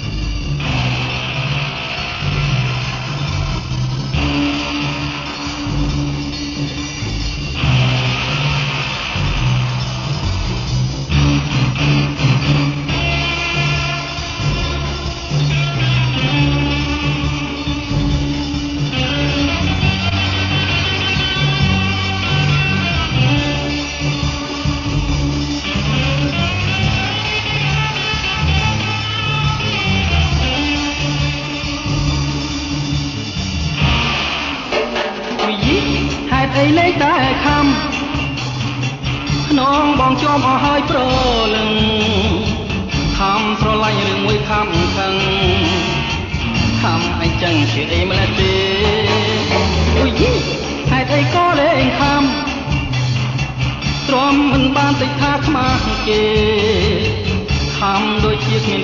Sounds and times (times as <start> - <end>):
Music: 0.0 - 58.8.